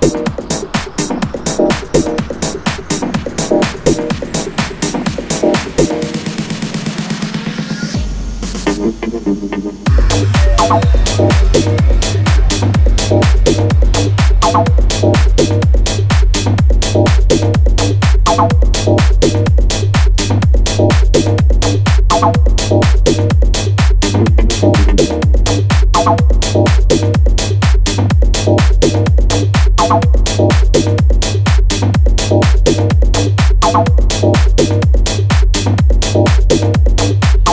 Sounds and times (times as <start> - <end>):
Electronica: 0.0 - 37.5.